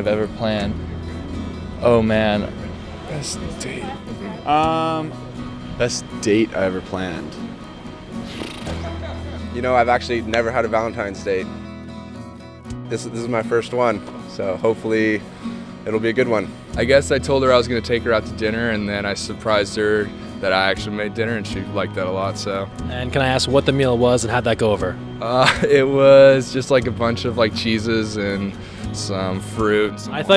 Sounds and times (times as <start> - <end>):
Music: 0.0 - 30.3
Speech: 9.6 - 11.4, 12.9 - 15.2, 15.9 - 30.3.